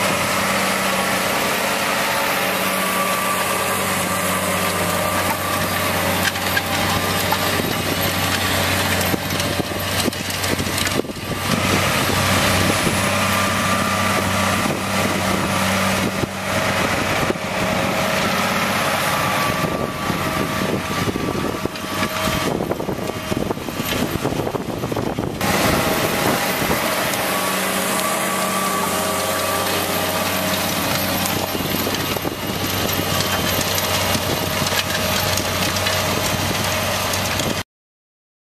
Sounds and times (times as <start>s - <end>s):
Idling: 0.0s - 37.6s
Vehicle: 0.0s - 37.6s
Vibration: 0.0s - 37.6s.